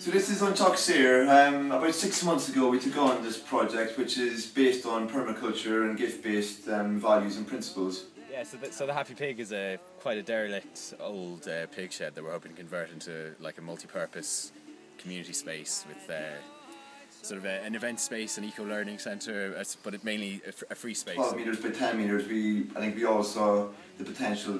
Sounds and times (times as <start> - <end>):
Speech: 0.0 - 16.5, 17.2 - 24.6
Music: 0.0 - 24.6.